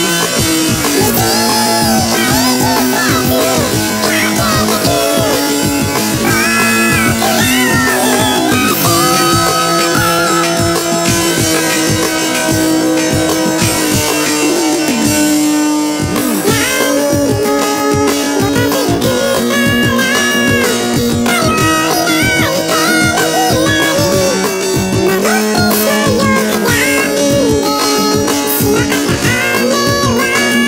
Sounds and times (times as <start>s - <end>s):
Music: 0.0s - 30.6s.